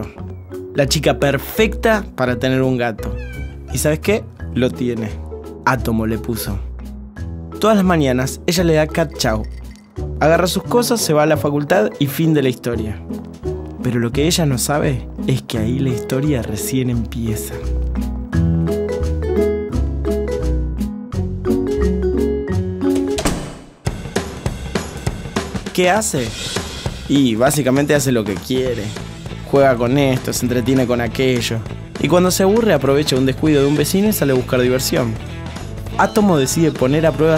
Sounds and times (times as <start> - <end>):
Music: 0.0 - 37.3
Speech: 0.8 - 6.7, 7.6 - 9.5, 10.2 - 13.0, 13.8 - 17.7, 25.8 - 26.4, 27.1 - 35.2, 35.9 - 37.3.